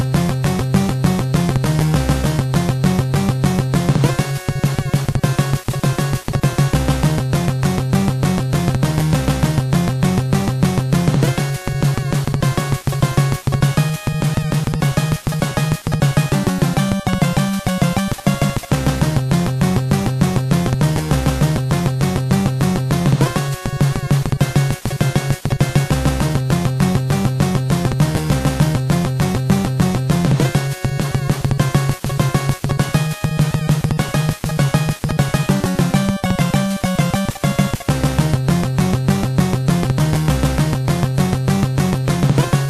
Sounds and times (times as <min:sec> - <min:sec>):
Theme music: 0:00.0 - 0:42.7.